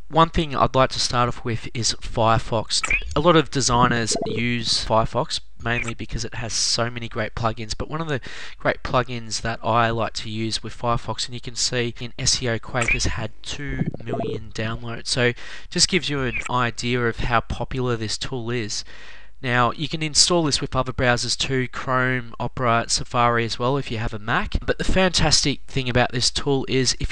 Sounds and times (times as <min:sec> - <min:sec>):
Speech: 0:00.0 - 0:27.1.